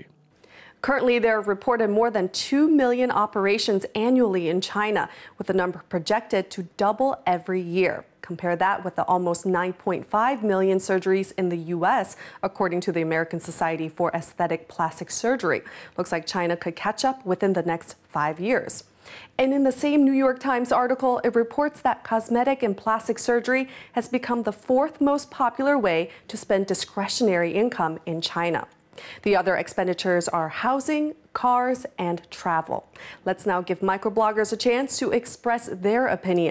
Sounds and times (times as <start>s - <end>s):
Speech: 0.8s - 36.5s.